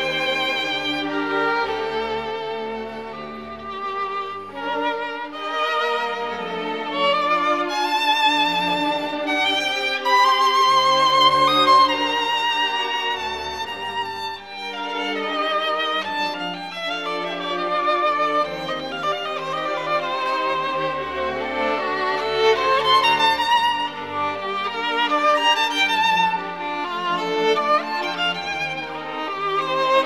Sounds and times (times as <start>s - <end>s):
Violin, fiddle: 0.0s - 30.0s.